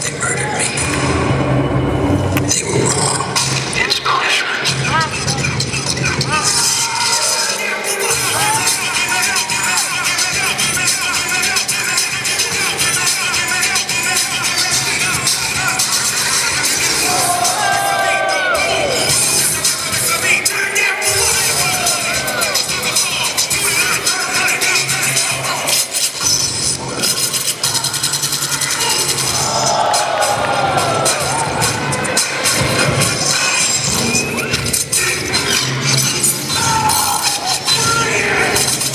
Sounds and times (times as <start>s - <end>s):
Music: 0.0s - 38.9s.